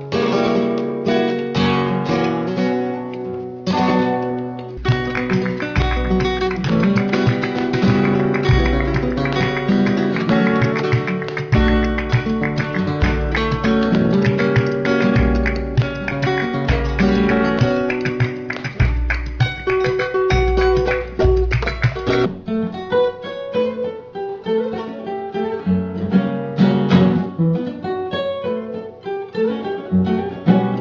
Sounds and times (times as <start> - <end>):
Strum: 0.0 - 27.9.